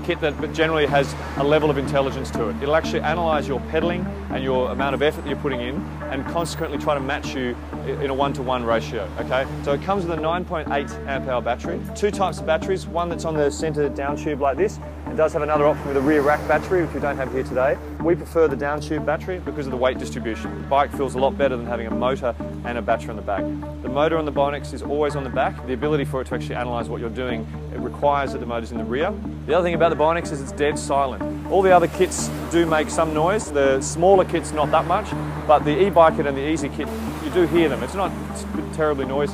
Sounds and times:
Music: 0.0 - 39.3
Speech: 0.0 - 39.3.

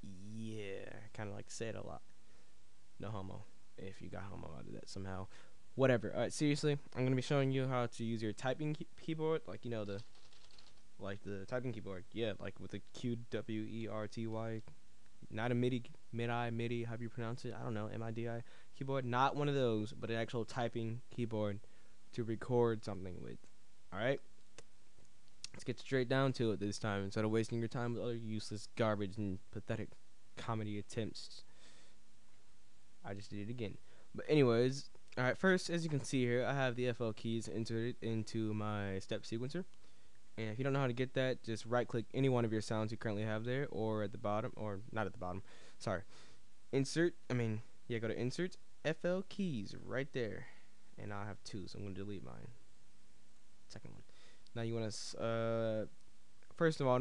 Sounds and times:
Speech: 0.0 - 2.1, 3.0 - 10.1, 11.0 - 24.3, 25.5 - 31.5, 33.0 - 39.7, 40.4 - 46.1, 46.7 - 52.6, 53.7 - 57.0.

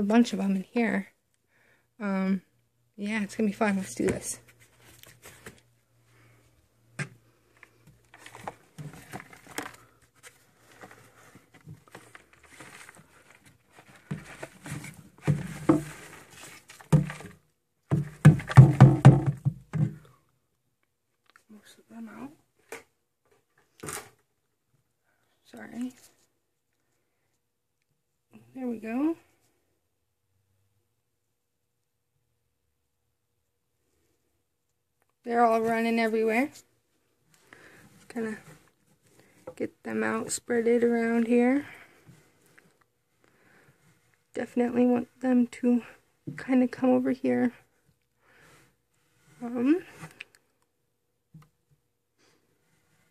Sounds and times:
Speech: 0.0 - 1.2, 2.0 - 4.4, 21.5 - 22.4, 25.4 - 26.2, 28.4 - 29.3, 35.2 - 36.7, 38.1 - 38.5, 39.6 - 41.8, 44.4 - 47.7, 49.4 - 50.0.

